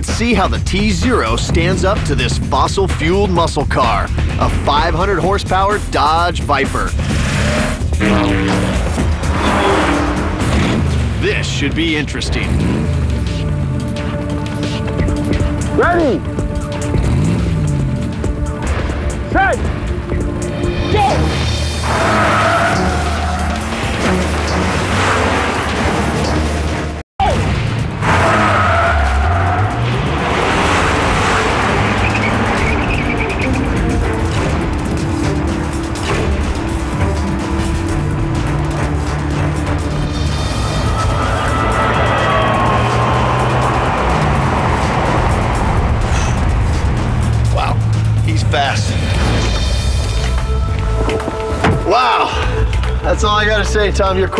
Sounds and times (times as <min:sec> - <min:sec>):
Speech: 0:00.0 - 0:07.0, 0:11.2 - 0:12.5, 0:47.6 - 0:49.0, 0:53.0 - 0:54.3
Race car, auto racing: 0:00.0 - 0:20.2, 0:21.0 - 0:50.4
Music: 0:00.0 - 0:54.3.